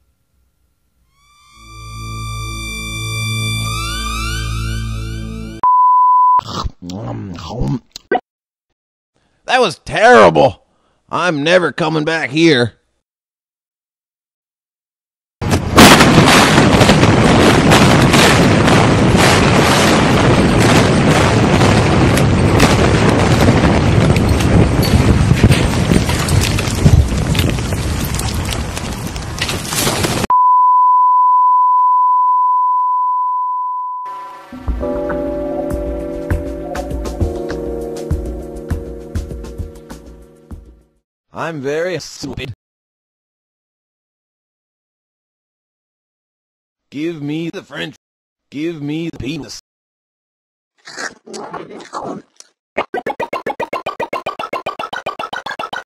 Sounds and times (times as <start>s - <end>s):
Speech: 6.8s - 7.9s, 9.5s - 12.8s, 41.4s - 42.6s, 46.9s - 49.6s
Boom: 15.4s - 28.0s.